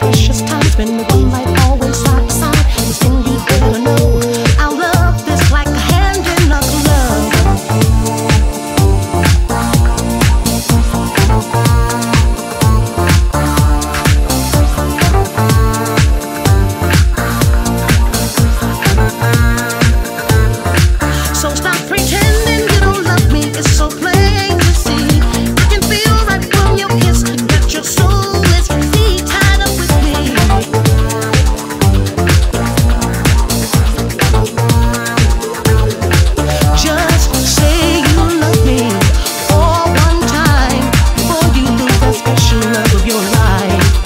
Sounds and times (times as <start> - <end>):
Music: 0.0 - 44.0.